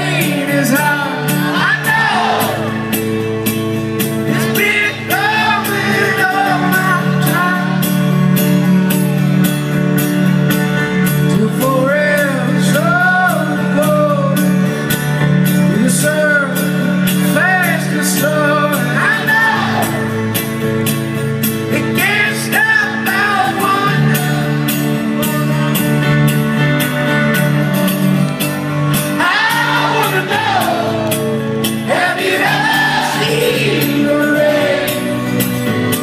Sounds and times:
Music: 0:00.0 - 0:36.0.

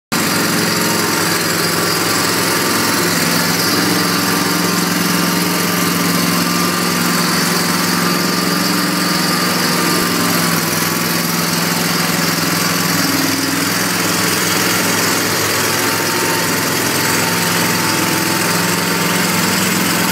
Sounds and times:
Lawn mower: 0:00.1 - 0:20.1.

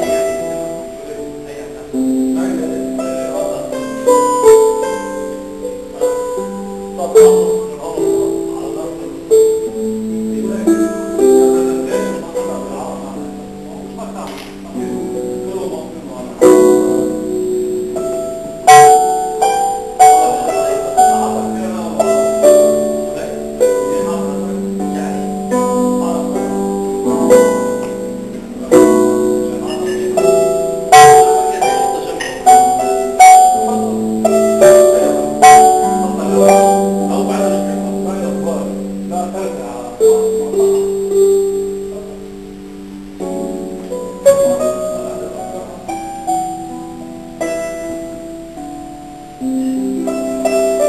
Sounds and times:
Harp: 0:00.0 - 0:50.8
Pizzicato: 0:00.0 - 0:50.8.

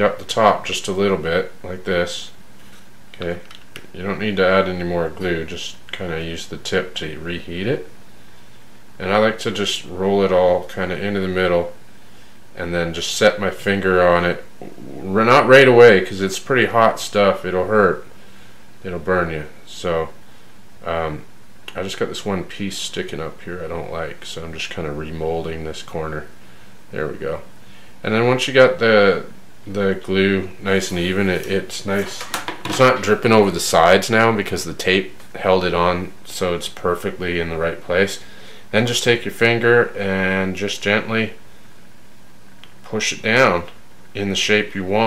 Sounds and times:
Speech: 0:00.0 - 0:02.4, 0:03.2 - 0:07.9, 0:09.0 - 0:11.8, 0:12.6 - 0:18.1, 0:18.8 - 0:20.2, 0:20.8 - 0:41.4, 0:42.8 - 0:45.0
Inside, small room: 0:00.0 - 0:45.0.

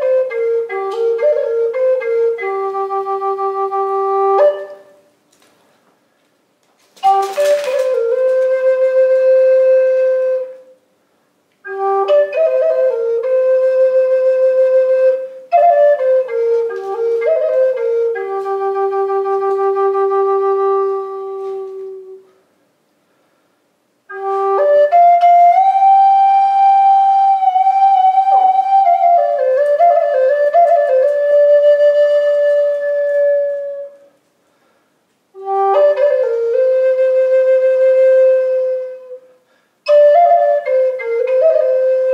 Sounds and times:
Flute: 0:00.0 - 0:05.2, 0:07.0 - 0:10.9, 0:11.6 - 0:22.5, 0:24.1 - 0:34.3, 0:35.3 - 0:42.1.

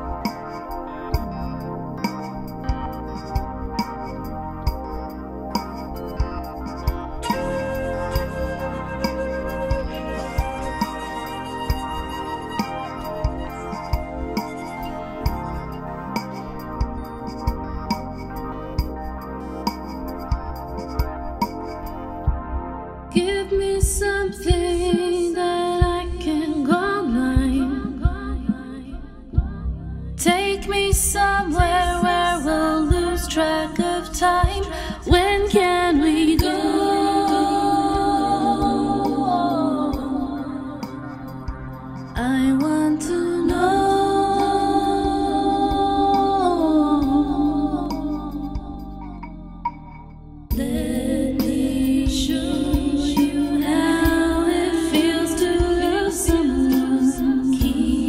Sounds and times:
Music: 0:00.0 - 0:58.0.

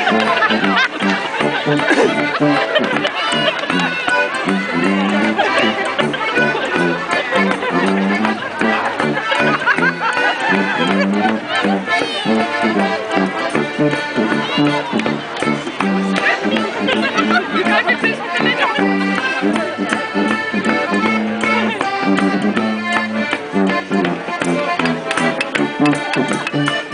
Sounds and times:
Music: 0:00.0 - 0:26.9
Speech: 0:10.7 - 0:12.6.

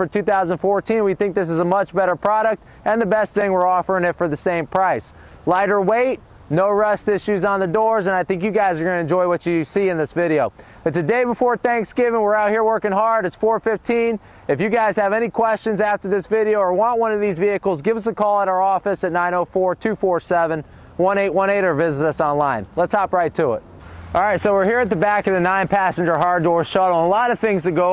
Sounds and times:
Speech: 0:00.0 - 0:27.9.

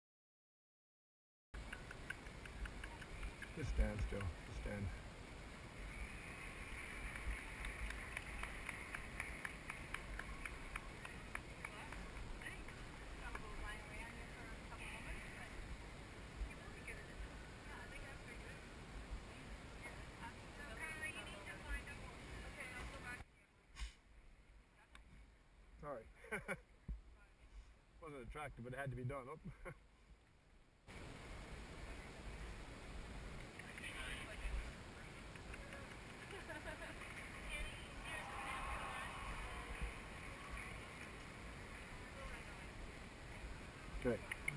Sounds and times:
Speech: 0:19.8 - 0:23.4.

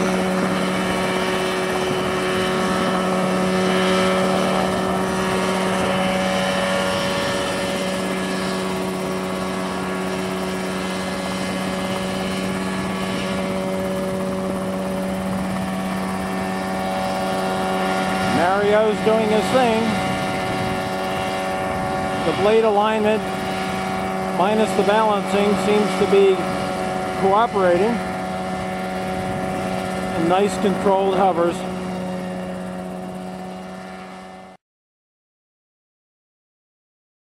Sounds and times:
Speech: 0:18.4 - 0:20.0, 0:22.3 - 0:23.3, 0:24.4 - 0:26.5, 0:27.2 - 0:28.0, 0:30.2 - 0:31.7.

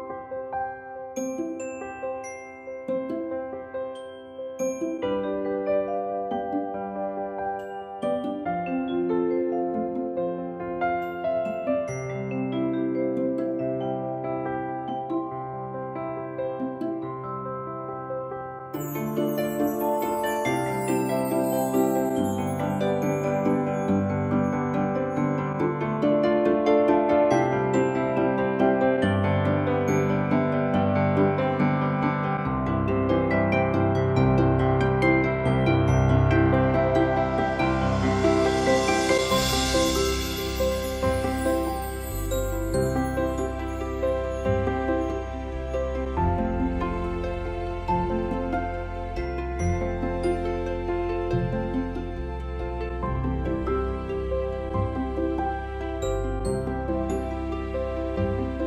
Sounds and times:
Music: 0:00.0 - 0:58.6.

